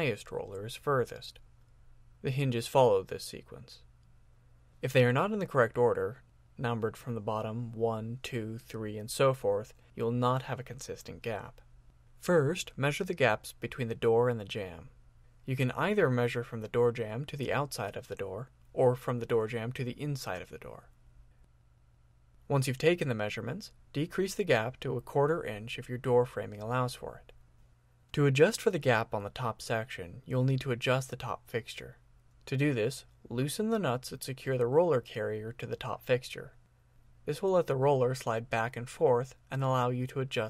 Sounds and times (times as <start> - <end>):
Speech: 0.0 - 1.4, 2.2 - 3.9, 4.8 - 21.0, 22.5 - 27.4, 28.1 - 36.6, 37.3 - 40.5.